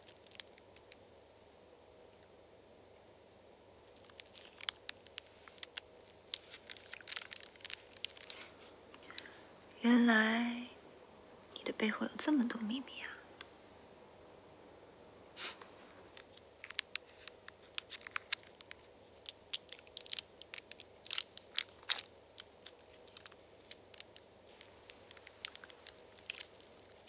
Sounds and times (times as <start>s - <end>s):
Speech: 9.8s - 10.8s, 11.6s - 13.2s.